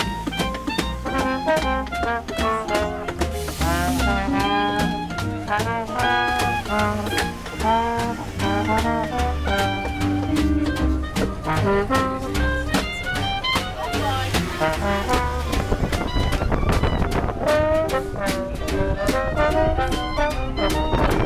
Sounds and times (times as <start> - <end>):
Jazz: 0.0 - 21.2
Speech: 12.8 - 16.1.